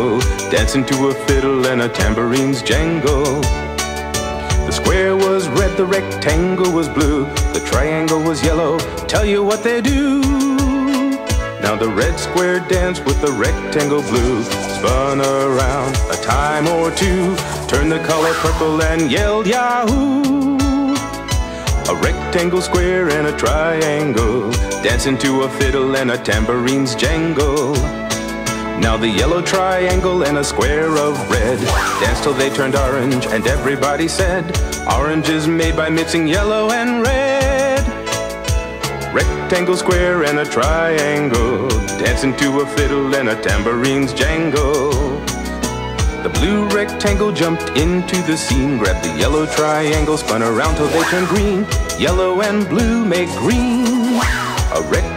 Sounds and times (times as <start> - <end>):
Music: 0.0 - 55.1.